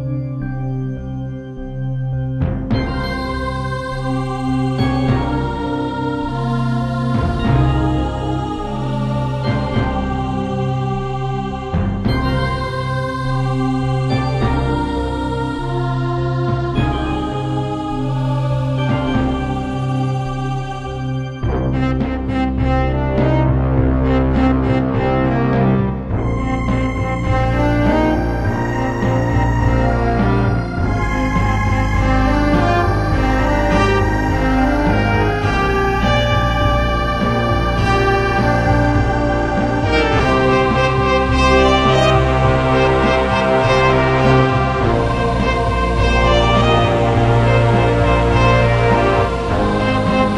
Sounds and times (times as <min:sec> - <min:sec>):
Theme music: 0:00.0 - 0:50.3.